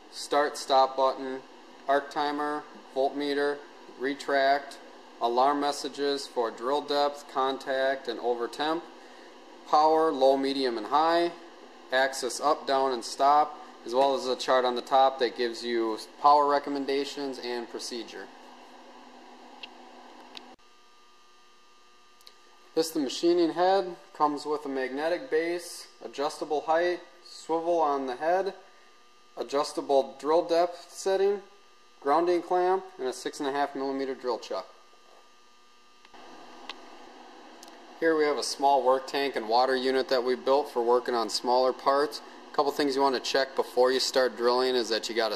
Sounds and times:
Speech: 0:00.1 - 0:08.9, 0:09.7 - 0:18.3, 0:22.8 - 0:28.6, 0:29.4 - 0:34.8, 0:38.0 - 0:45.3.

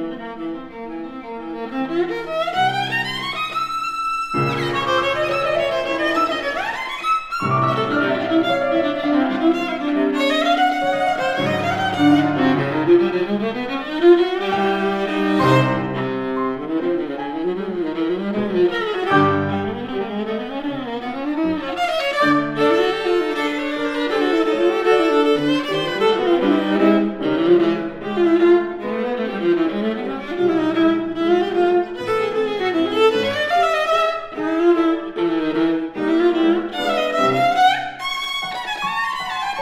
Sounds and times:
Classical music: 0:00.0 - 0:39.6
Piano: 0:00.0 - 0:39.6
Violin, fiddle: 0:00.0 - 0:39.6.

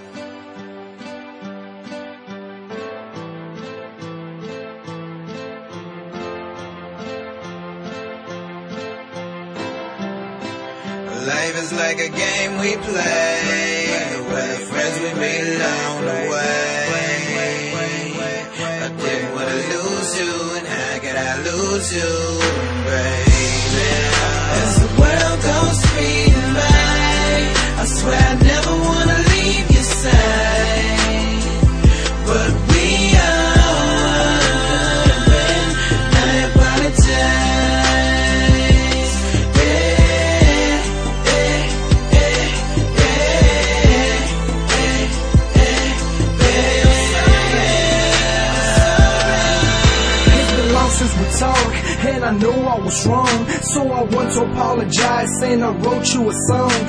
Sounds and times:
Music: 0:00.0 - 0:56.8.

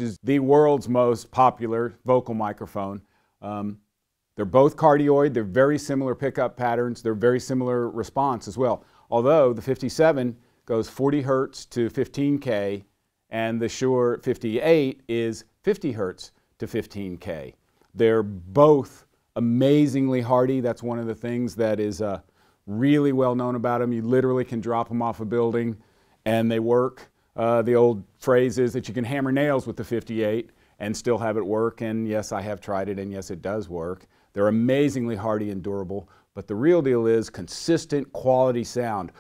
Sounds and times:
Speech: 0:00.0 - 0:39.2.

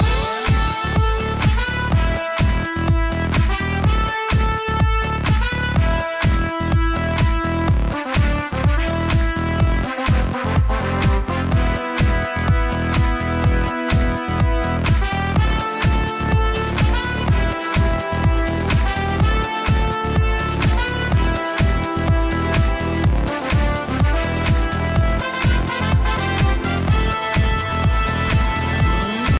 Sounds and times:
Music: 0:00.0 - 0:29.3.

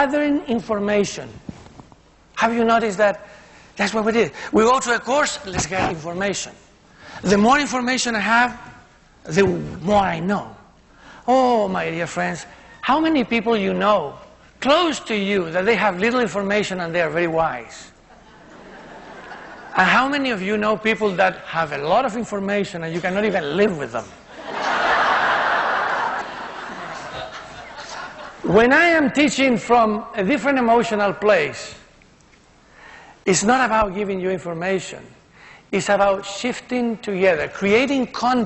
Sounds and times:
Male speech, man speaking: 0:00.0 - 0:01.4, 0:02.4 - 0:03.2, 0:03.8 - 0:06.6, 0:07.2 - 0:08.7, 0:09.3 - 0:10.7, 0:11.3 - 0:17.9, 0:19.8 - 0:24.1, 0:28.5 - 0:31.9, 0:33.3 - 0:35.2, 0:35.8 - 0:38.4.

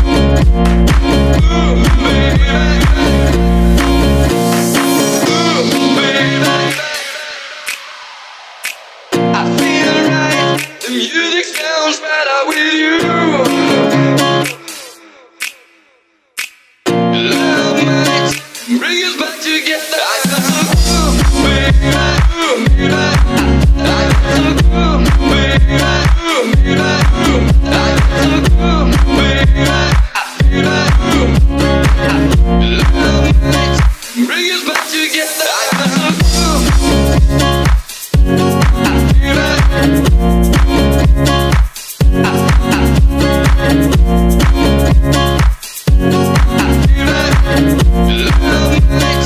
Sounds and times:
Funk: 0:00.0 - 0:07.1, 0:20.2 - 0:34.9, 0:35.7 - 0:49.2
Rhythm and blues: 0:00.0 - 0:15.8, 0:16.4 - 0:49.2
Independent music: 0:00.0 - 0:49.2.

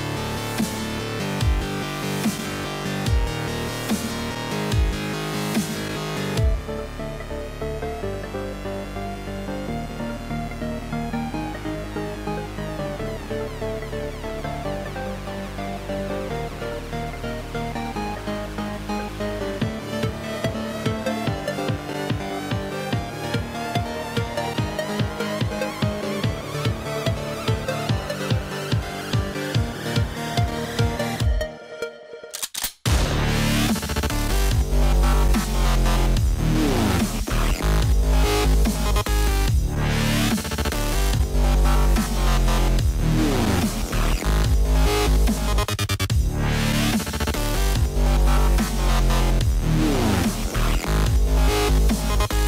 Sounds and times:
Dubstep: 0:00.0 - 0:31.6, 0:32.8 - 0:52.4.

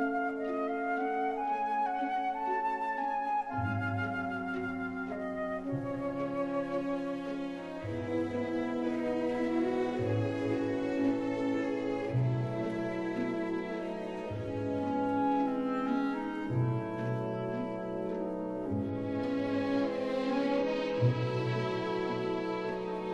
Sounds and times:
Cello: 0:00.0 - 0:23.1.

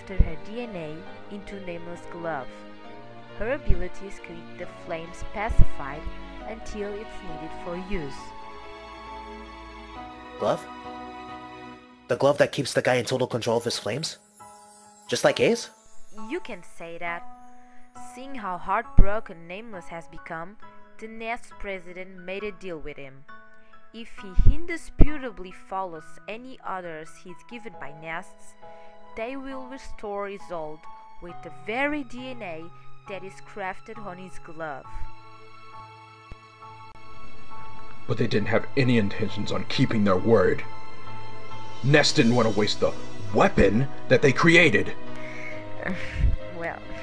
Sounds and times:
Speech: 0:00.0 - 0:02.5, 0:03.4 - 0:08.3, 0:10.4 - 0:10.6, 0:12.1 - 0:14.2, 0:15.1 - 0:17.2, 0:18.0 - 0:23.2, 0:24.0 - 0:28.6, 0:29.2 - 0:35.0, 0:38.1 - 0:40.7, 0:41.9 - 0:47.0
Music: 0:00.0 - 0:47.0.

